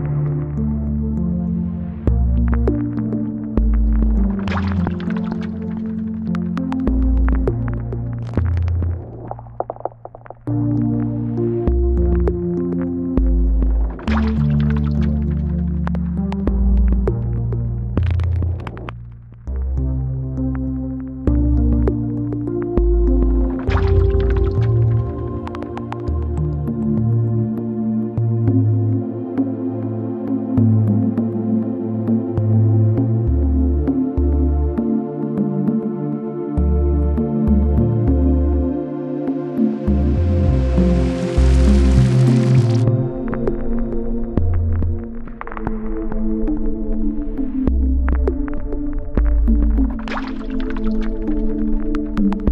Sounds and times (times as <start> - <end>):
Raindrop: 2.3 - 10.5, 13.2 - 19.0, 22.8 - 26.2, 40.0 - 42.9.